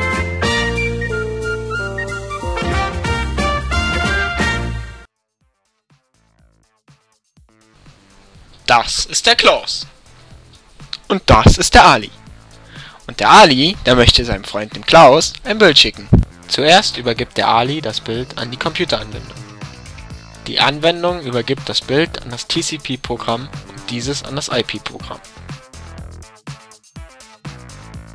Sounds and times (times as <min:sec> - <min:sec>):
Music: 0:00.0 - 0:28.1
Speech: 0:08.7 - 0:09.9, 0:11.0 - 0:12.2, 0:13.1 - 0:19.4, 0:20.5 - 0:25.2.